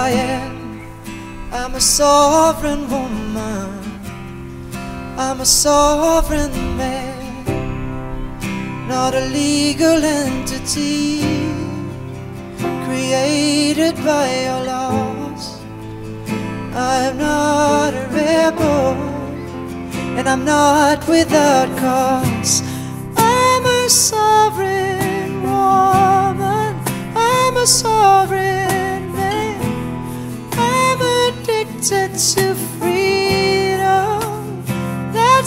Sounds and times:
Music: 0:00.0 - 0:35.4.

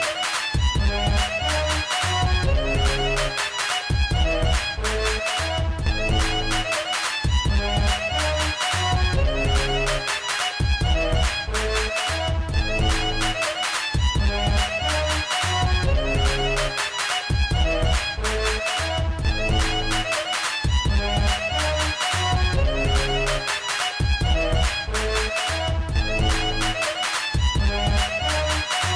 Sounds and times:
Music: 0:00.0 - 0:28.9.

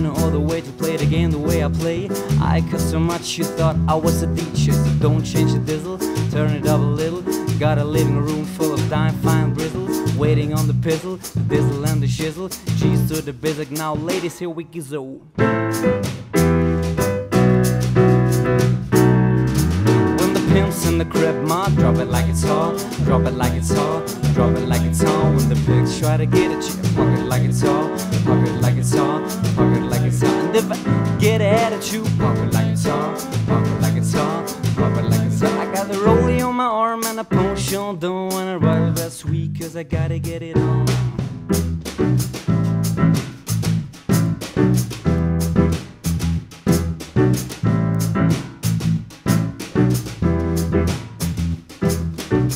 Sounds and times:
Piano: 0:00.0 - 0:14.7, 0:15.3 - 0:52.5.

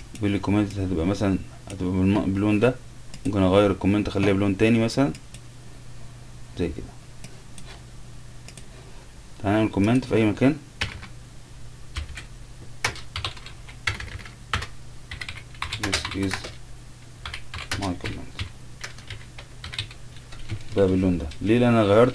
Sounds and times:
Typing: 0:10.8 - 0:11.1, 0:12.0 - 0:16.6, 0:17.2 - 0:20.8.

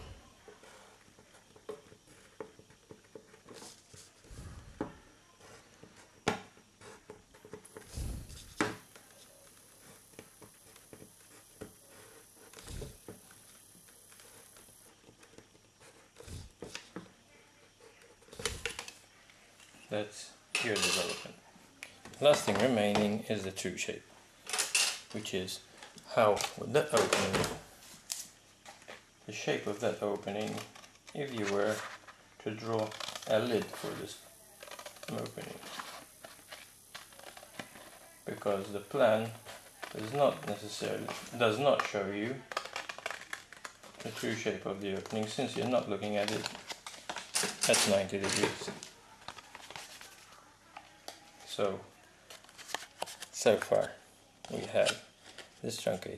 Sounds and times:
Inside, small room: 0:00.0 - 0:56.1.

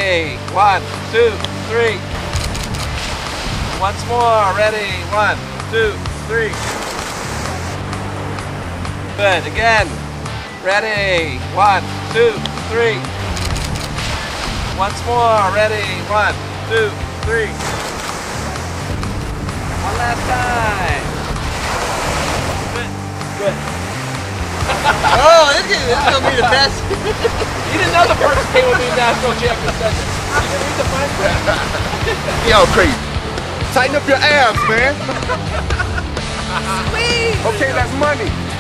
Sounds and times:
Speech: 0:00.0 - 0:02.0, 0:03.8 - 0:06.7, 0:09.2 - 0:09.9, 0:10.6 - 0:13.0, 0:14.8 - 0:17.6, 0:19.8 - 0:21.1, 0:25.0 - 0:27.0, 0:27.7 - 0:33.0, 0:33.7 - 0:35.1, 0:36.6 - 0:38.4
Music: 0:00.0 - 0:38.6
Outside, rural or natural: 0:00.0 - 0:38.6.

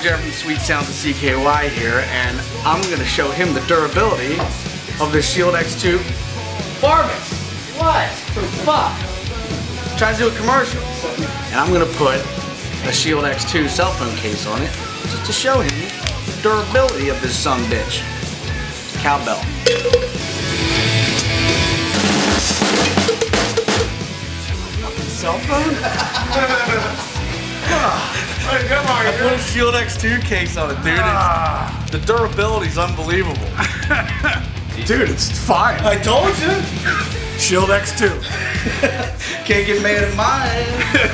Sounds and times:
Speech: 0:00.0 - 0:04.4, 0:05.0 - 0:06.1, 0:10.0 - 0:18.0, 0:19.0 - 0:19.5, 0:27.6 - 0:33.5, 0:34.8 - 0:38.3, 0:39.4 - 0:40.8
Music: 0:00.0 - 0:41.1.

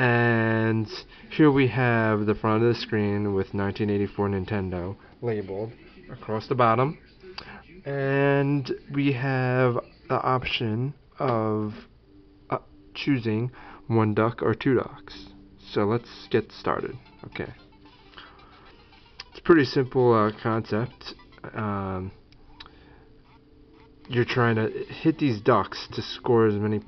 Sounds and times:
Speech: 0:00.0 - 0:11.8, 0:24.1 - 0:26.8.

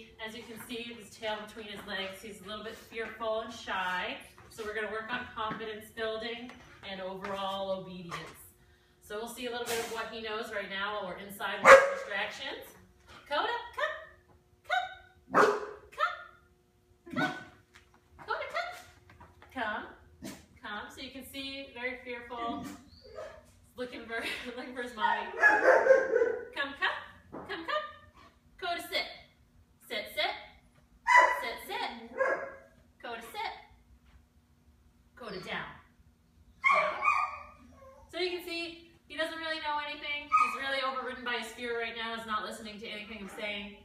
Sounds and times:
Speech: 0:00.0 - 0:08.5, 0:18.2 - 0:18.9, 0:19.5 - 0:20.0, 0:20.6 - 0:22.8, 0:31.4 - 0:32.1, 0:33.0 - 0:33.7, 0:35.2 - 0:35.9, 0:38.1 - 0:43.8
Yip: 0:14.7 - 0:15.8, 0:31.1 - 0:31.4, 0:36.6 - 0:38.1, 0:40.3 - 0:40.6.

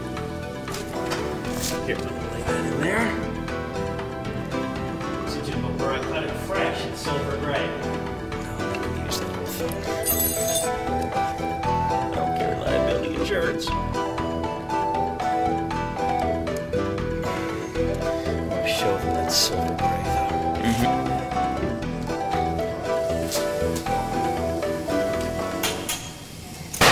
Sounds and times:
Music: 0:00.0 - 0:26.9
Speech: 0:05.3 - 0:07.9, 0:12.1 - 0:13.8, 0:18.6 - 0:19.7, 0:20.6 - 0:21.0.

